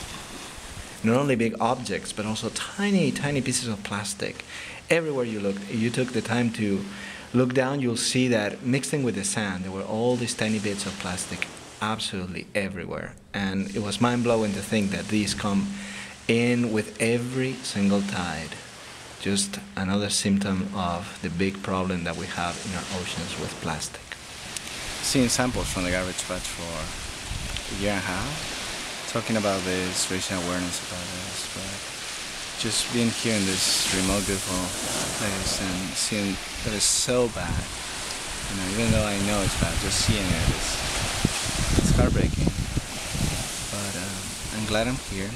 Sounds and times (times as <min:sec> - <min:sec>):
Speech: 0:01.0 - 0:18.6, 0:19.2 - 0:24.2, 0:25.0 - 0:26.9, 0:27.7 - 0:28.5, 0:29.1 - 0:31.8, 0:32.6 - 0:37.7, 0:38.5 - 0:40.9, 0:41.8 - 0:42.5, 0:43.7 - 0:45.3.